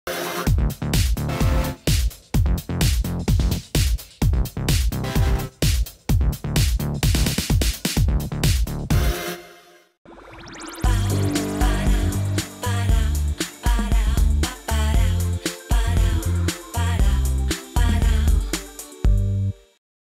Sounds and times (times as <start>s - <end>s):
Soundtrack music: 10.6s - 15.6s
Pop music: 10.8s - 19.0s
Rhythm and blues: 11.0s - 17.8s.